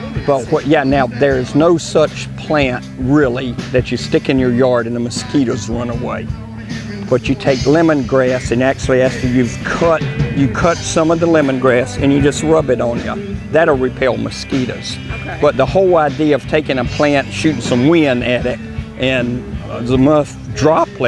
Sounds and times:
Music: 0:00.0 - 0:21.0
Speech: 0:00.1 - 0:06.3, 0:07.0 - 0:21.0.

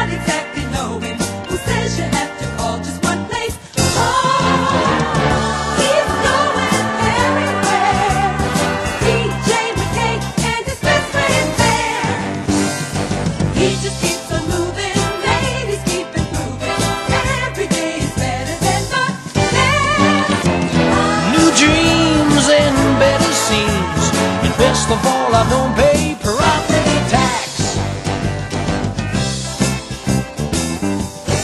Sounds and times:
Music: 0:00.0 - 0:31.4.

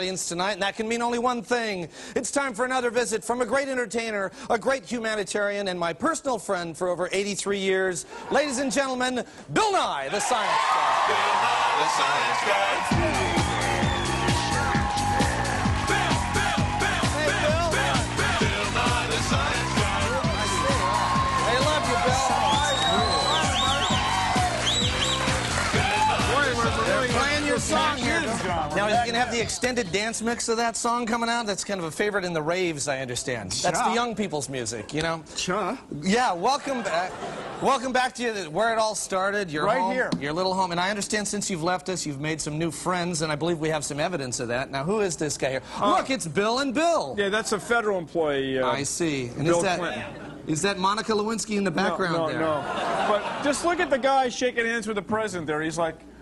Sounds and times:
Drum: 0:12.8 - 0:29.6
Drum kit: 0:12.8 - 0:29.7.

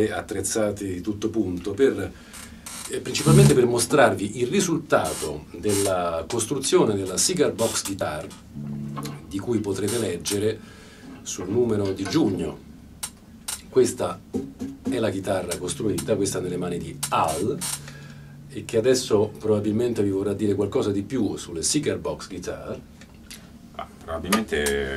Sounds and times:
Speech: 0:00.0 - 0:02.2, 0:02.9 - 0:08.4, 0:09.1 - 0:10.6, 0:11.2 - 0:12.6, 0:13.7 - 0:14.2, 0:14.9 - 0:17.6, 0:18.5 - 0:22.8, 0:23.8 - 0:24.9
Music: 0:03.2 - 0:04.0, 0:08.5 - 0:09.7, 0:14.4 - 0:19.4.

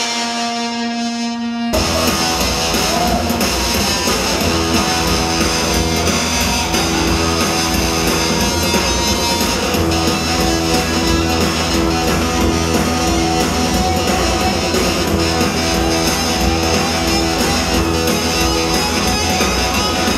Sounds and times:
Music: 0:00.0 - 0:20.1.

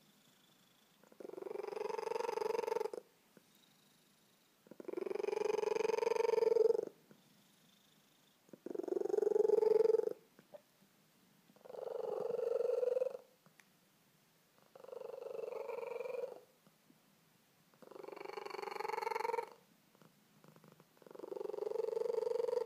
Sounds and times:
Purr: 0:00.0 - 0:10.7, 0:11.6 - 0:13.4, 0:14.6 - 0:16.6, 0:17.7 - 0:22.6.

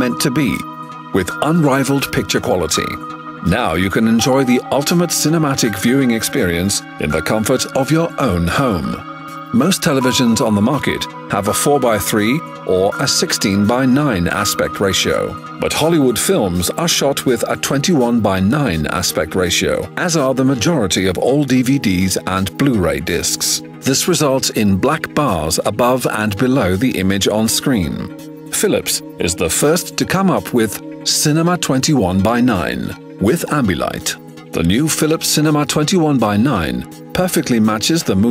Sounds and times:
Music: 0:00.0 - 0:38.3
Speech: 0:00.0 - 0:38.3.

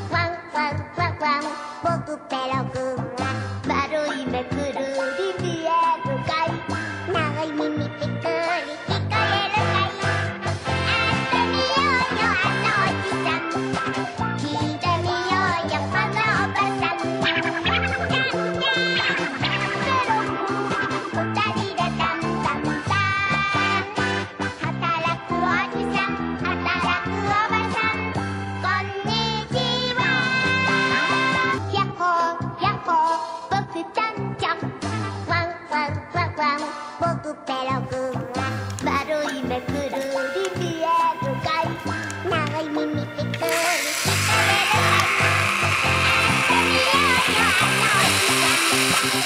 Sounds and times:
Music: 0:00.0 - 0:49.2.

